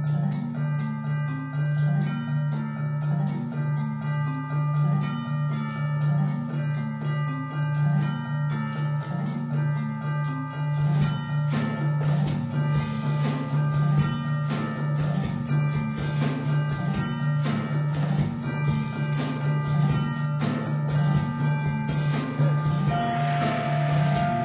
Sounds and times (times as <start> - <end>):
Glockenspiel: 0.0 - 24.4
Marimba, xylophone: 0.0 - 24.4
Drum: 10.8 - 24.4.